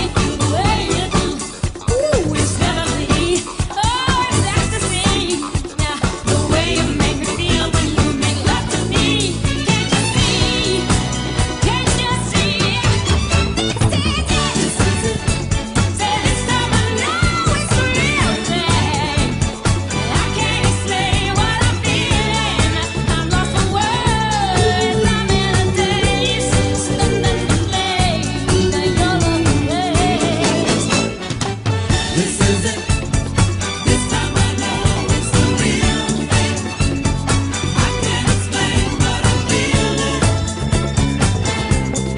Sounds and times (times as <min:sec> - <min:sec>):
Disco: 0:00.0 - 0:42.1.